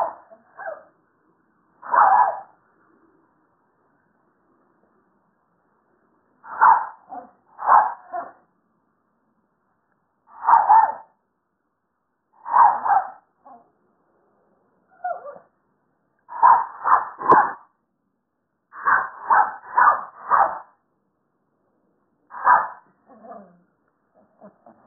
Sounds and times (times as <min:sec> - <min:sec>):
Bark: 0:00.0 - 0:00.9, 0:01.8 - 0:02.6, 0:06.5 - 0:08.5, 0:10.3 - 0:11.2, 0:12.4 - 0:13.7, 0:15.0 - 0:15.5, 0:16.3 - 0:17.7, 0:18.8 - 0:20.8, 0:22.3 - 0:23.6.